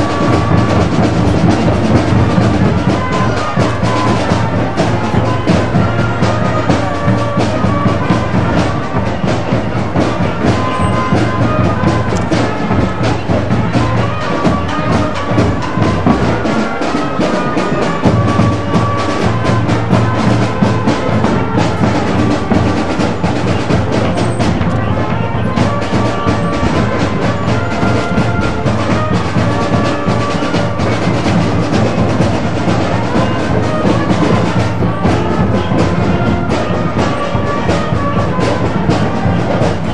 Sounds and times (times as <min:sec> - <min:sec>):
Music: 0:00.0 - 0:39.9.